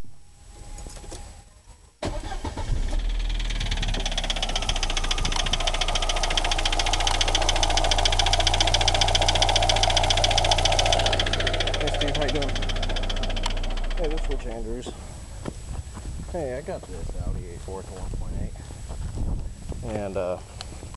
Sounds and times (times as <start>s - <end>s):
Vehicle: 0.0s - 20.9s
Engine: 0.5s - 15.5s
Speech: 11.8s - 12.6s, 14.0s - 15.0s, 16.3s - 18.7s, 19.8s - 20.5s.